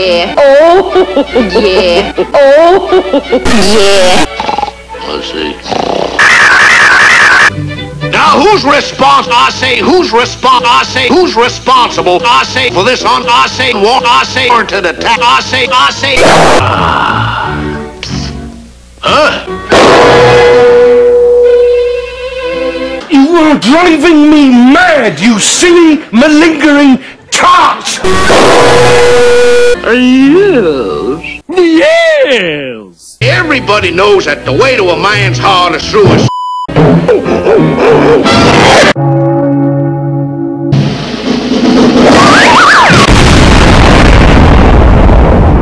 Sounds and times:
Music: 0.0 - 6.3, 7.4 - 24.5, 25.7 - 31.4, 33.1 - 43.1.

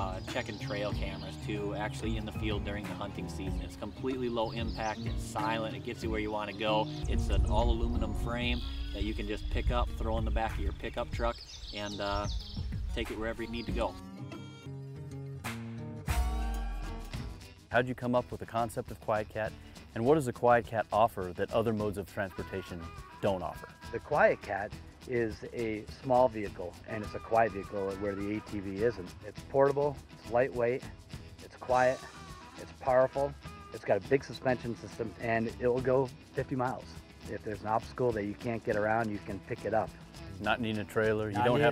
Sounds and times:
Speech: 0.0 - 14.0, 17.7 - 41.7
Music: 0.0 - 41.7
Bird: 3.6 - 14.0.

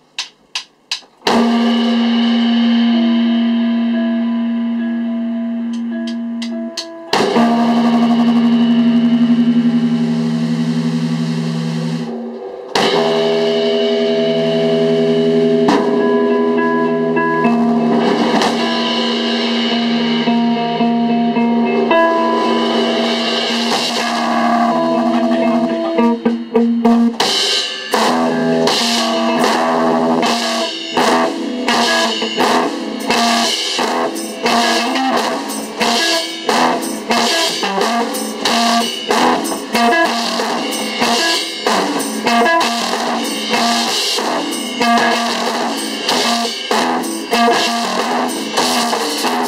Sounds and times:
Drum: 0.0 - 5.0, 5.6 - 49.4
Drum kit: 0.0 - 49.4
Electric guitar: 1.2 - 49.4.

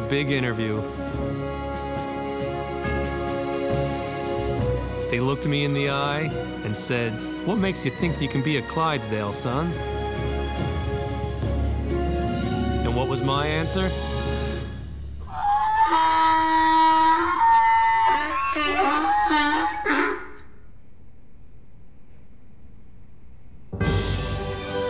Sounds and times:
Speech: 0.0 - 0.9, 5.1 - 9.8, 12.8 - 14.0
Music: 0.0 - 15.7, 23.7 - 24.8
Animal: 15.2 - 20.5.

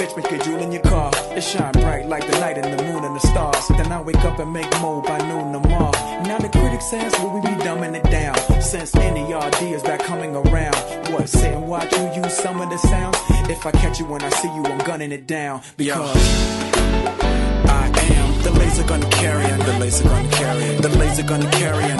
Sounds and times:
Music: 0.0 - 21.9.

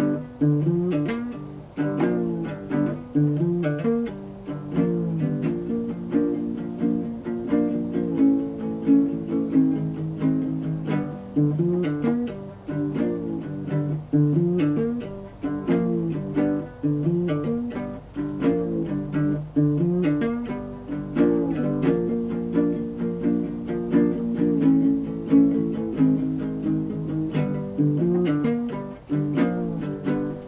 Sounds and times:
Music: 0.0 - 30.4.

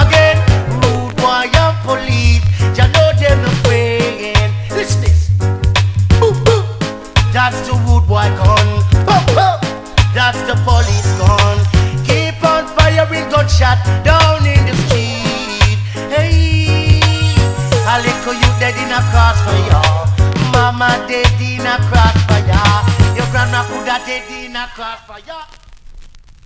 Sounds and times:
Music: 0.0 - 25.1.

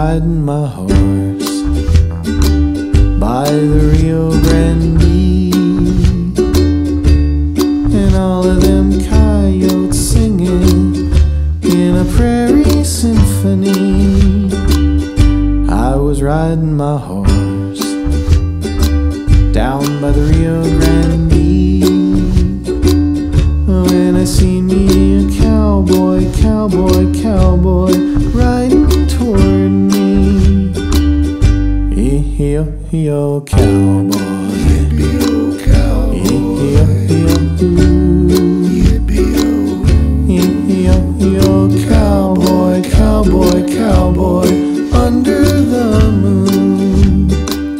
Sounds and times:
Ukulele: 0.0 - 47.7.

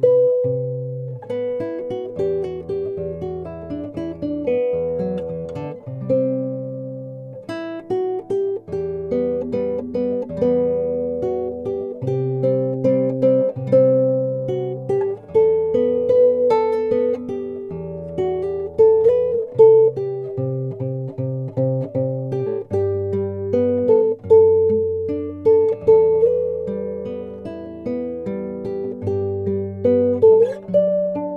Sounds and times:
Guitar: 0.0 - 31.3.

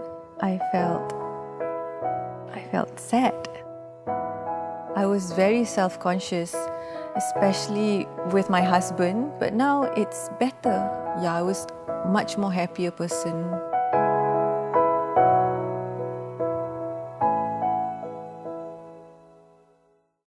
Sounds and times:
Music: 0.0 - 20.2
Speech: 0.4 - 1.1, 2.6 - 3.6, 5.0 - 13.6.

